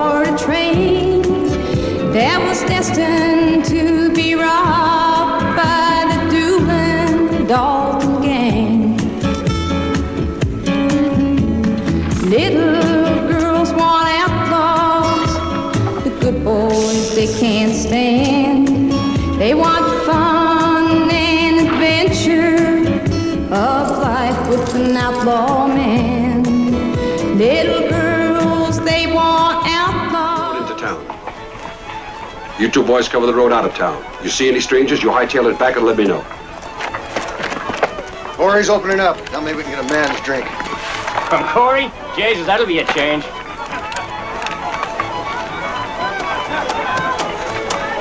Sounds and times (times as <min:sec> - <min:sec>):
Music: 0:00.0 - 0:48.0.